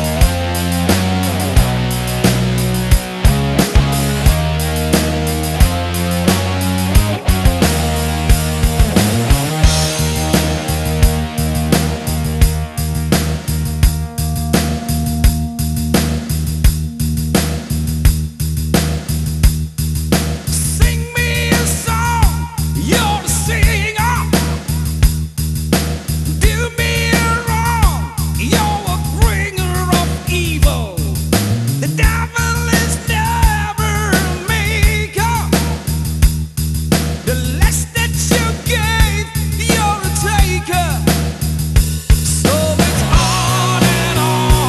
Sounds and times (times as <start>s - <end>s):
Music: 0.0s - 44.6s.